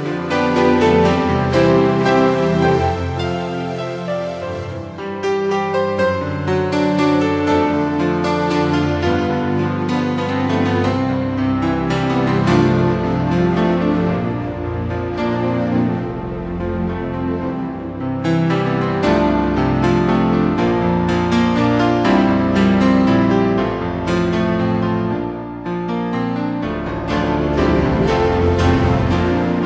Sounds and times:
Theme music: 0:00.0 - 0:24.6, 0:26.6 - 0:29.6.

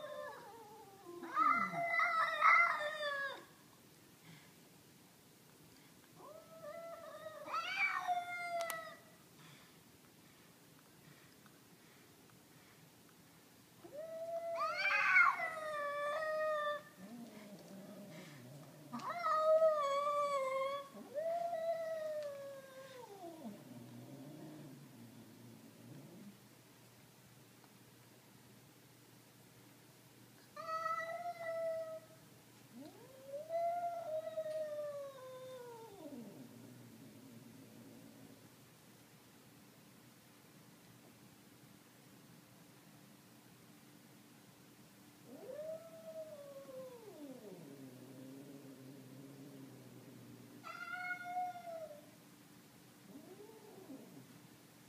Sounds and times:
Caterwaul: 0:00.0 - 0:03.5, 0:06.2 - 0:09.0, 0:13.9 - 0:17.8, 0:18.9 - 0:23.6, 0:30.6 - 0:32.1, 0:45.3 - 0:49.6, 0:50.6 - 0:52.1, 0:53.1 - 0:54.3.

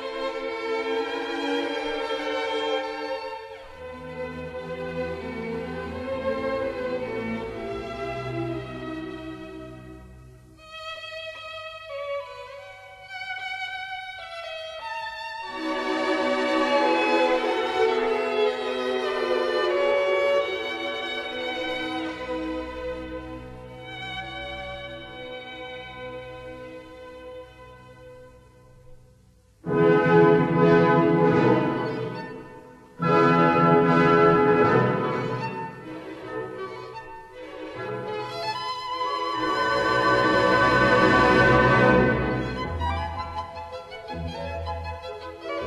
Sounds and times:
Violin, fiddle: 0:00.0 - 0:28.4, 0:30.2 - 0:45.6.

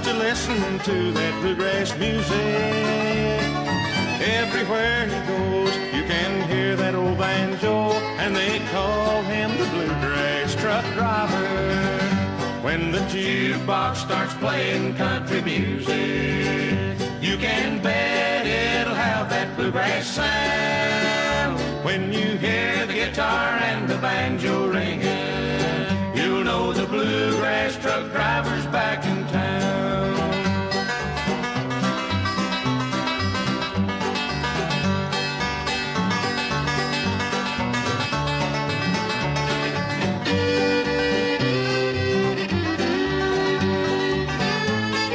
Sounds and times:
Bluegrass: 0:00.0 - 0:45.1.

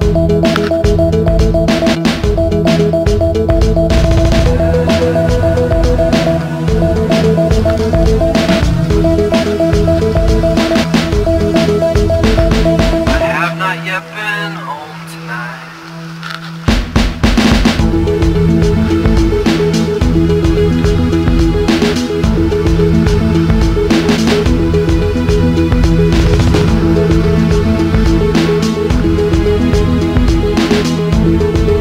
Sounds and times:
Music: 0:00.0 - 0:31.8.

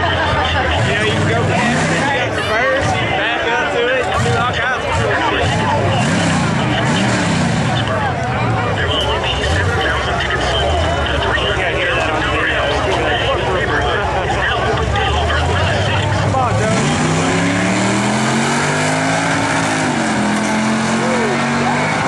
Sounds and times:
Speech: 0:00.0 - 0:17.6.

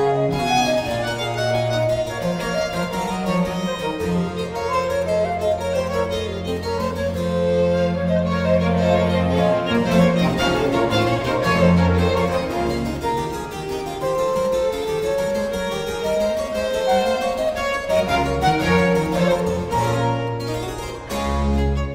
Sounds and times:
Piano: 0:00.0 - 0:21.9
Violin, fiddle: 0:00.0 - 0:21.9.

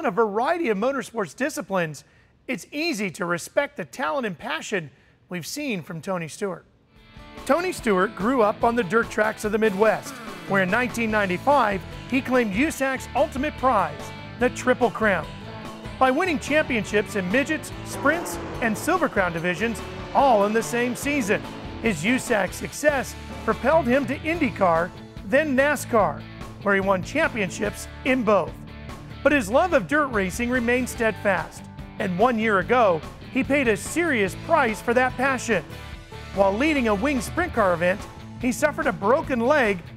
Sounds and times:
Speech: 0:00.0 - 0:06.7, 0:07.4 - 0:15.3, 0:16.0 - 0:28.6, 0:29.2 - 0:35.7, 0:36.4 - 0:39.9
Music: 0:06.9 - 0:39.9
Car passing by: 0:15.3 - 0:23.9.

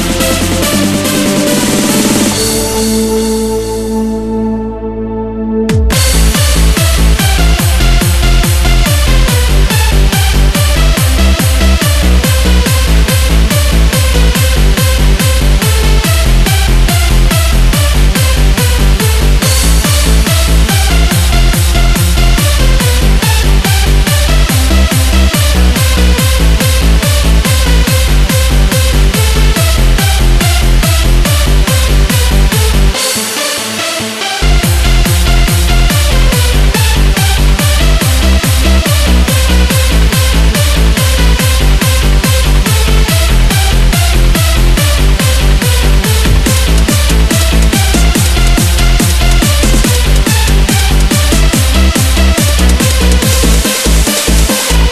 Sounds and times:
Music: 0:00.0 - 0:54.9.

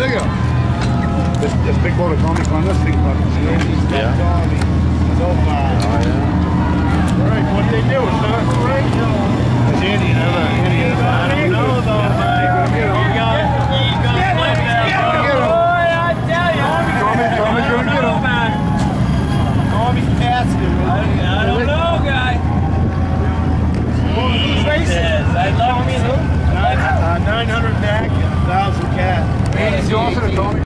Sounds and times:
Motorboat, speedboat: 0:00.0 - 0:30.6
Speech: 0:24.0 - 0:30.6.

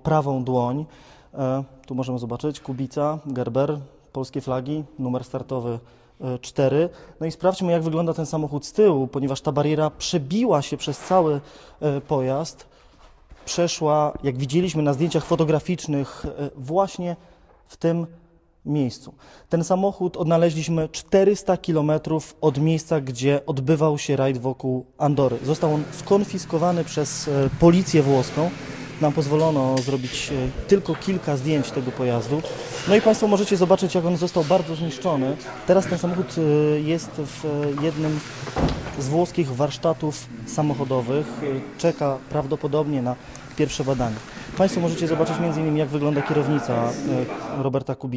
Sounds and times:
Speech: 0:00.0 - 0:12.7, 0:13.4 - 0:38.3, 0:38.9 - 0:48.1.

